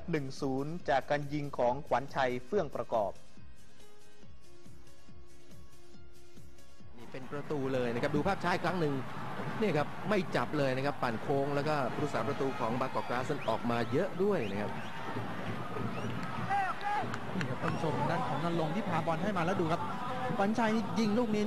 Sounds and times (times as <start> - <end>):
Speech: 0.0 - 3.2, 7.0 - 9.0, 9.6 - 14.7, 17.4 - 21.4
Music: 0.0 - 21.4.